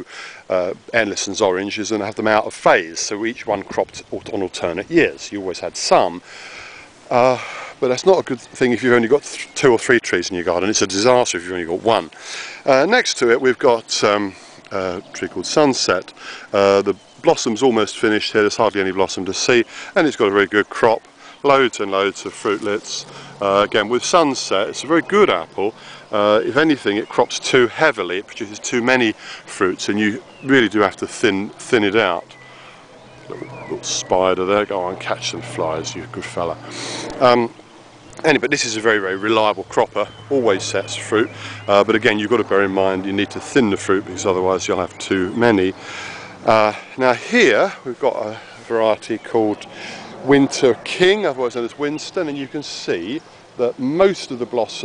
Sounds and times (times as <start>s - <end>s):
Speech: 0.0s - 6.2s, 7.1s - 32.4s, 33.3s - 37.6s, 38.2s - 45.8s, 46.4s - 54.8s
Outside, urban or manmade: 0.0s - 54.8s.